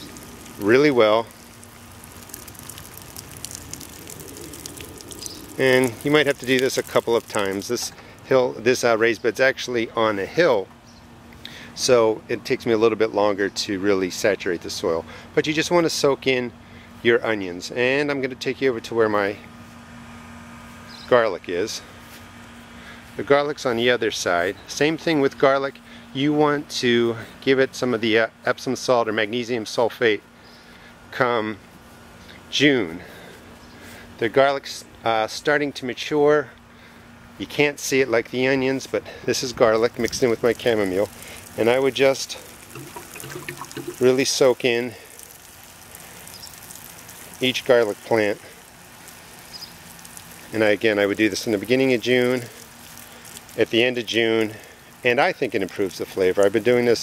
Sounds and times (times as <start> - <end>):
Pour: 0.0 - 8.0, 39.9 - 57.0
Speech: 0.6 - 1.3, 5.6 - 10.7, 11.8 - 19.4, 21.1 - 21.9, 23.2 - 30.2, 31.1 - 31.6, 32.5 - 33.1, 34.2 - 36.5, 37.4 - 42.4, 44.0 - 45.0, 47.4 - 48.5, 50.5 - 52.6, 53.6 - 57.0.